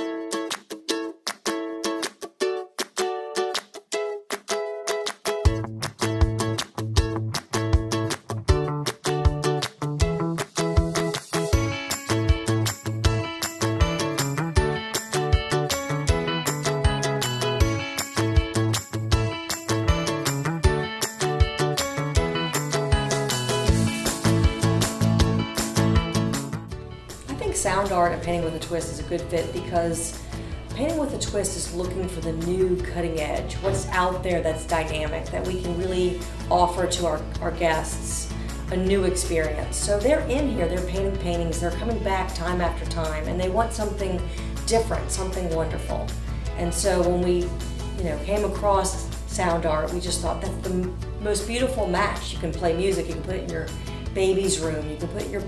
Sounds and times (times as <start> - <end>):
Music: 0.0 - 55.4
Speech: 27.3 - 30.2, 30.8 - 55.4.